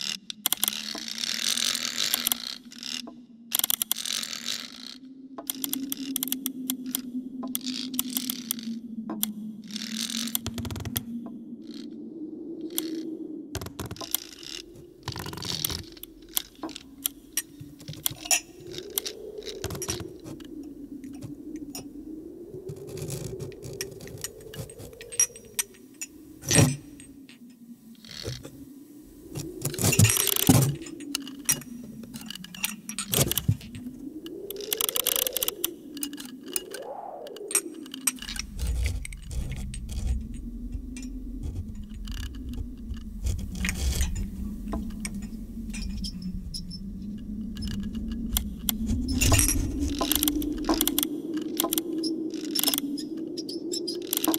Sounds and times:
Hum: 5.0 - 54.3.

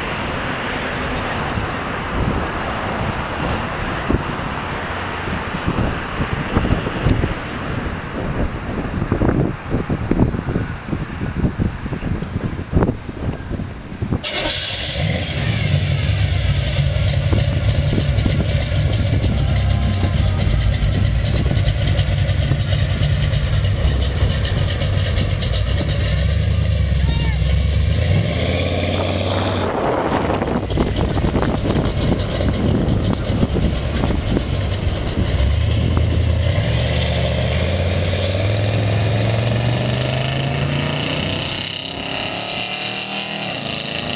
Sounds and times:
Car: 0.0 - 44.1
Idling: 14.3 - 28.0, 29.7 - 36.4
Accelerating, revving, vroom: 27.4 - 30.4, 35.3 - 44.1.

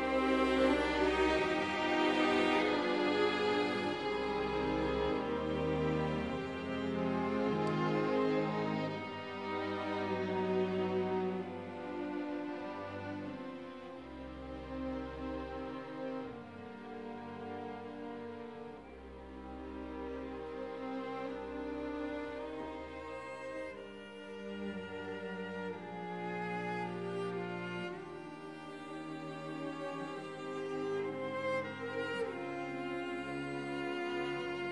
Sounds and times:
Music: 0.0 - 34.7.

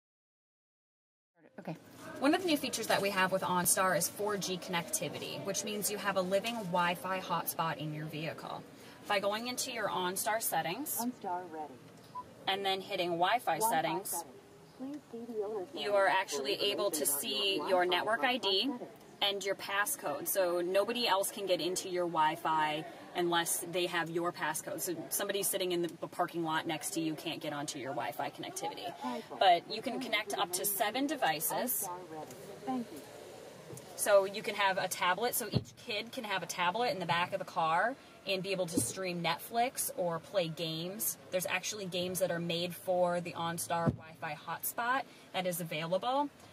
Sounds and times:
Speech: 1.5 - 11.7, 12.5 - 33.0, 34.0 - 46.3.

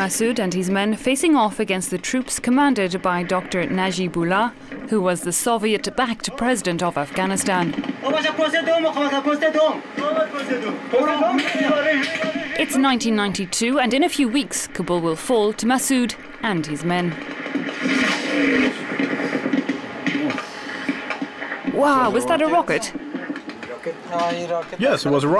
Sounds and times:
Television: 0.0 - 25.3.

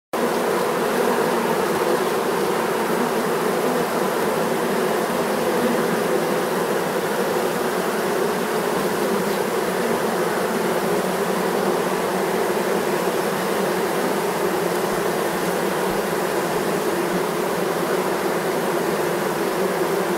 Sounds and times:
Bee, wasp, etc.: 0.2 - 20.1
Fly, housefly: 0.2 - 20.1.

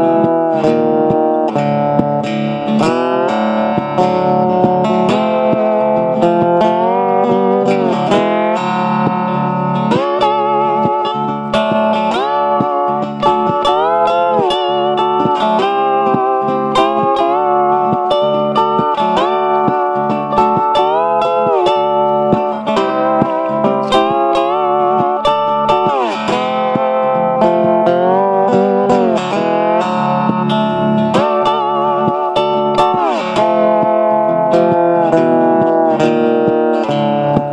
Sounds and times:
Distortion: 0.0 - 37.5
Guitar: 0.0 - 37.5.

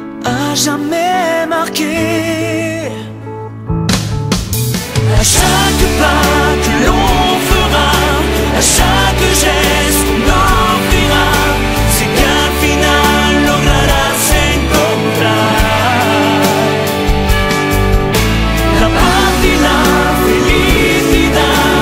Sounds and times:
Pop music: 0.0 - 3.3, 3.9 - 21.8.

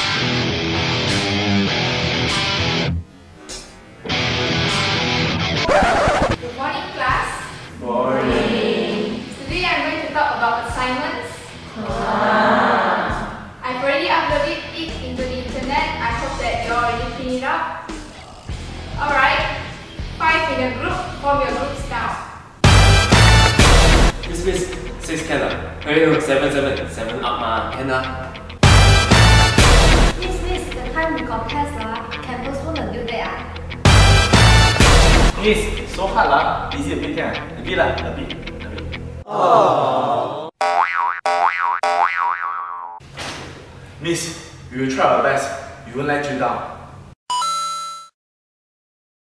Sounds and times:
Music: 0.0 - 12.2, 13.0 - 39.2.

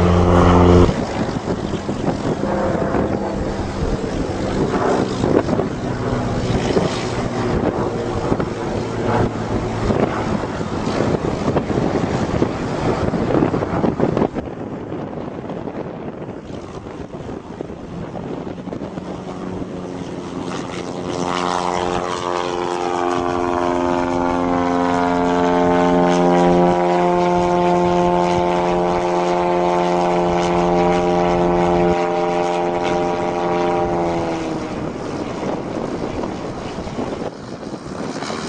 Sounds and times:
Vehicle: 0.0 - 38.4.

